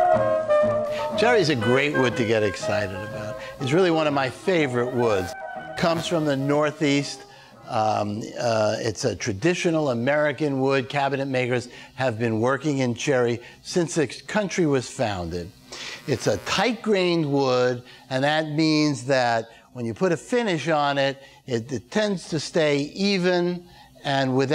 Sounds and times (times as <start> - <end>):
Music: 0.0 - 8.0
Speech: 1.2 - 15.5, 16.1 - 24.5.